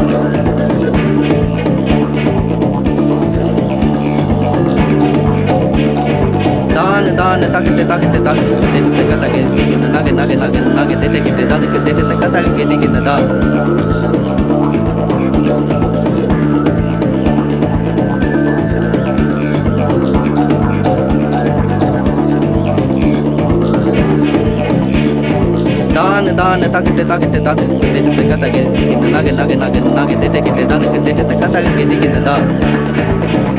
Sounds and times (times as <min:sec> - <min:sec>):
Didgeridoo: 0:00.0 - 0:33.5
Trance music: 0:00.0 - 0:33.5.